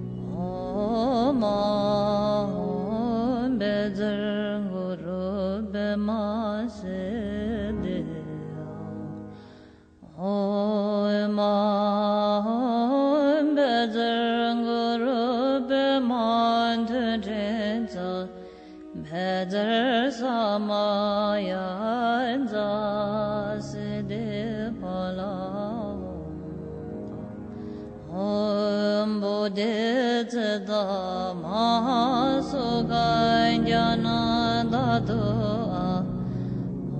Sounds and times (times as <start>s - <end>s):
Mantra: 0.3s - 9.0s, 10.1s - 26.6s, 28.1s - 36.3s.